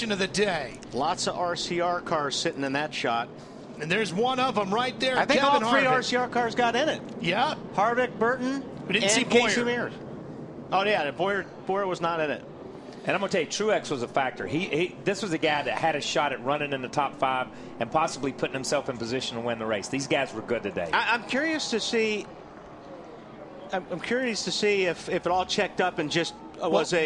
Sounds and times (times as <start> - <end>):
Speech: 0.0 - 10.0.